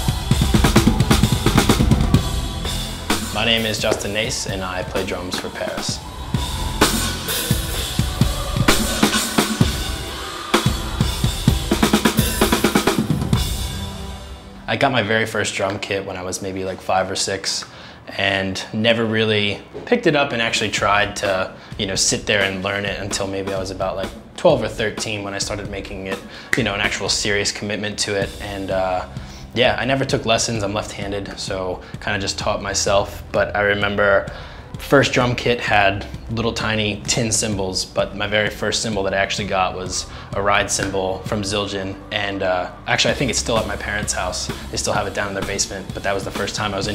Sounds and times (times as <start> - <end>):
Music: 0.0 - 46.9
Speech: 3.3 - 6.0, 14.7 - 46.9.